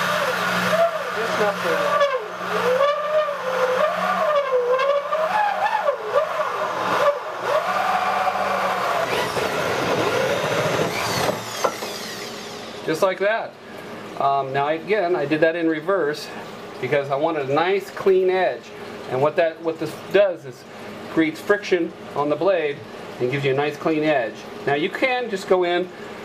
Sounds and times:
Speech: 1.2 - 2.0, 12.9 - 13.6, 14.2 - 26.0.

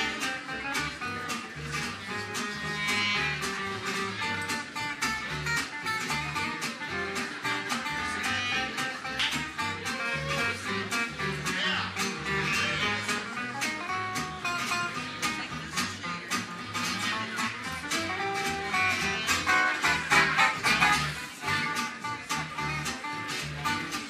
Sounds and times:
Jazz: 0.0 - 24.0.

